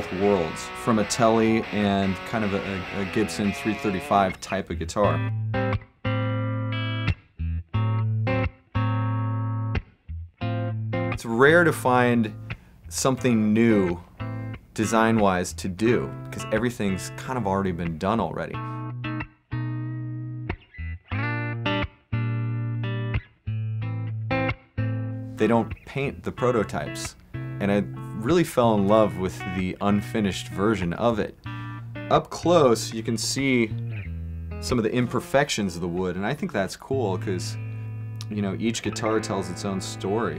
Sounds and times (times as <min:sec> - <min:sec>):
Speech: 0:00.0 - 0:05.3, 0:11.2 - 0:14.0, 0:14.8 - 0:18.6, 0:25.4 - 0:31.4, 0:32.1 - 0:33.8, 0:34.6 - 0:37.6, 0:38.2 - 0:40.3
Music: 0:00.0 - 0:40.3.